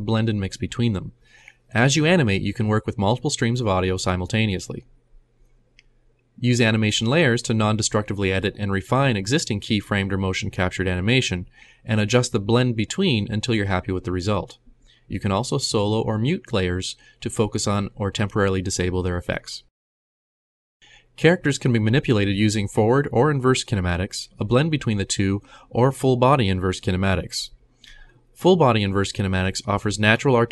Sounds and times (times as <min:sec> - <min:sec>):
Speech: 0:00.0 - 0:04.9, 0:06.4 - 0:19.7, 0:21.2 - 0:30.5.